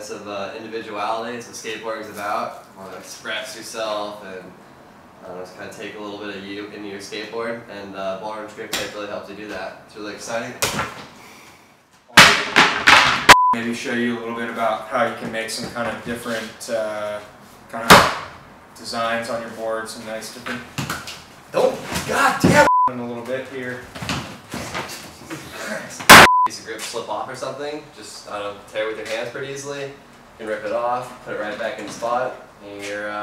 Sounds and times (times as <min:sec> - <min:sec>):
Speech: 0:00.0 - 0:04.6, 0:05.2 - 0:10.6, 0:13.6 - 0:18.1, 0:18.8 - 0:20.7, 0:21.5 - 0:23.9, 0:25.7 - 0:33.2.